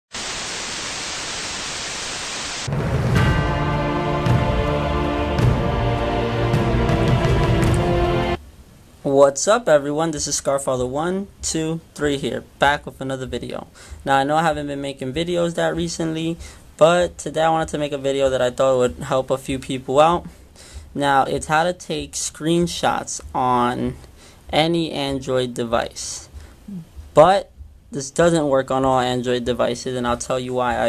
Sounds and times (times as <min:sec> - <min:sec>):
Music: 0:02.7 - 0:08.4
Speech: 0:09.0 - 0:20.3, 0:20.9 - 0:30.8.